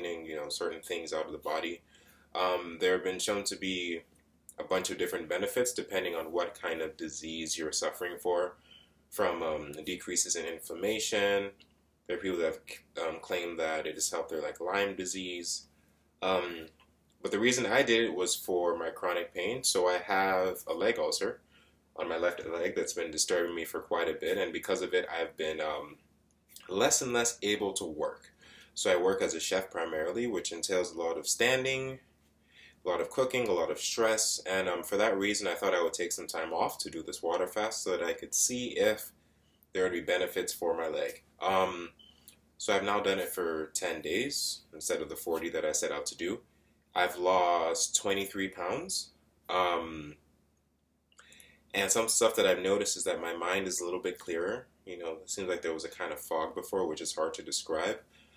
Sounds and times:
Speech: 0:00.0 - 0:21.4, 0:22.0 - 0:26.0, 0:26.6 - 0:32.0, 0:32.8 - 0:39.1, 0:39.8 - 0:42.0, 0:42.6 - 0:46.4, 0:47.0 - 0:50.2, 0:51.8 - 0:58.1.

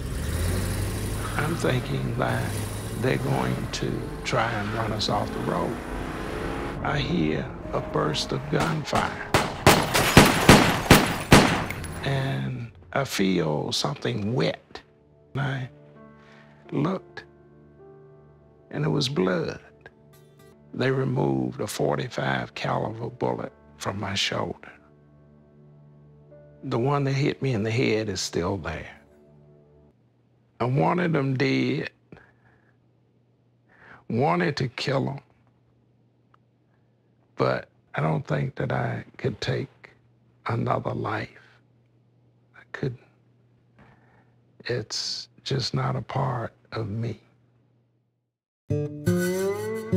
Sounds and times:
Music: 0:01.2 - 0:31.8, 0:48.7 - 0:49.9
Speech: 0:01.3 - 0:05.8, 0:06.8 - 0:09.3, 0:12.0 - 0:14.8, 0:15.4 - 0:15.7, 0:16.7 - 0:17.3, 0:18.7 - 0:19.8, 0:20.7 - 0:24.8, 0:26.6 - 0:29.0, 0:30.6 - 0:32.0, 0:34.1 - 0:35.3, 0:37.4 - 0:41.5, 0:42.6 - 0:43.1, 0:44.6 - 0:47.3.

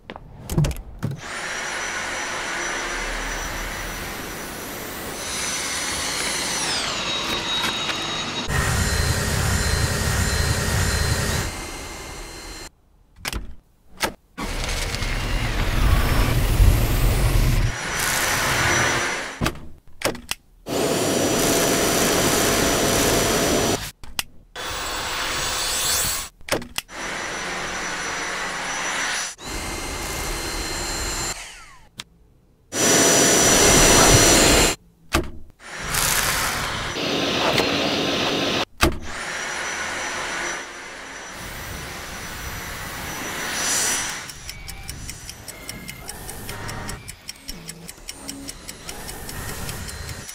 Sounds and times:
Vacuum cleaner: 0:01.2 - 0:12.7, 0:14.4 - 0:19.4, 0:20.7 - 0:23.9, 0:24.6 - 0:26.3, 0:26.9 - 0:31.8, 0:32.8 - 0:34.8, 0:35.6 - 0:47.0.

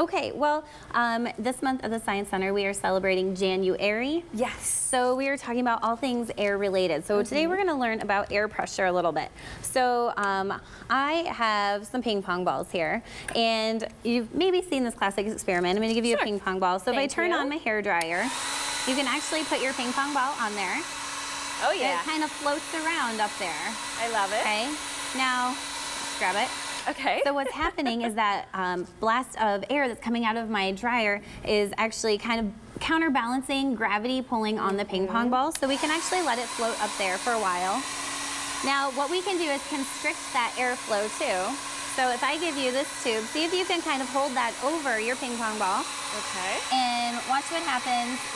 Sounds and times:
Speech: 0:13.4 - 0:17.8, 0:21.6 - 0:22.2.

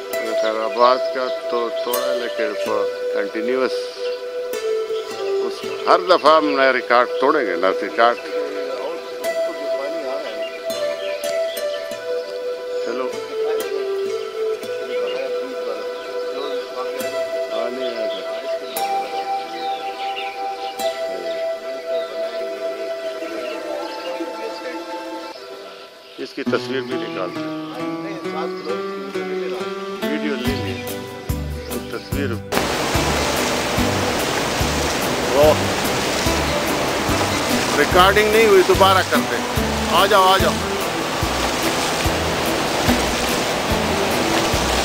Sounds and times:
Music: 0:00.0 - 0:44.8
Speech: 0:26.2 - 0:28.8, 0:29.4 - 0:30.8, 0:31.9 - 0:32.4, 0:37.8 - 0:40.6.

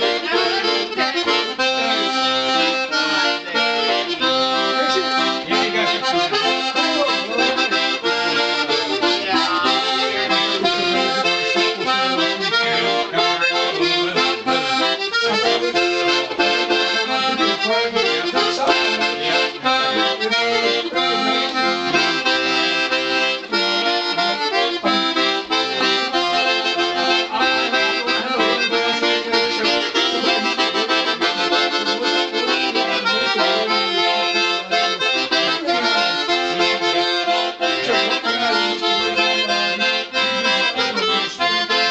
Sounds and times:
Music: 0:00.0 - 0:41.9
Speech: 0:00.0 - 0:41.9.

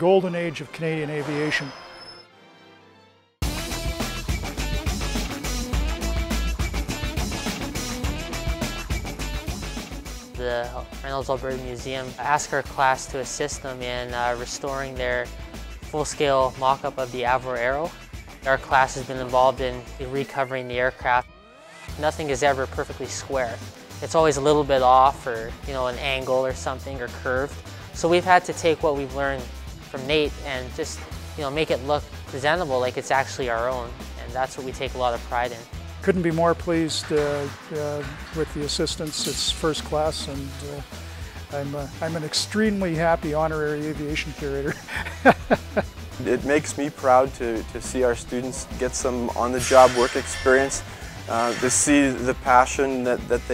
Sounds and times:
Speech: 0:00.0 - 0:01.8, 0:10.4 - 0:15.3, 0:15.9 - 0:21.3, 0:22.0 - 0:40.8, 0:41.5 - 0:44.8, 0:46.2 - 0:53.5
Music: 0:00.0 - 0:53.5.

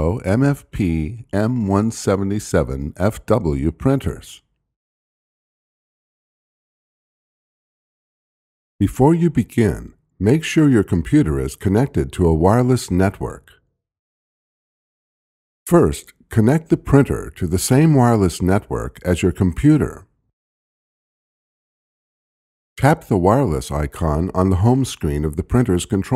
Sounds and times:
Speech: 0:00.0 - 0:04.5, 0:08.8 - 0:13.6, 0:15.7 - 0:20.1, 0:22.8 - 0:26.1.

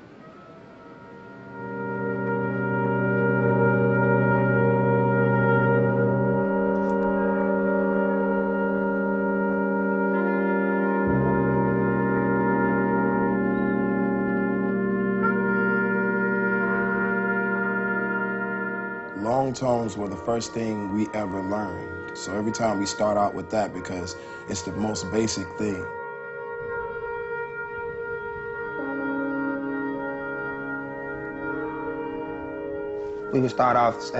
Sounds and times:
Music: 0:00.0 - 0:34.1.

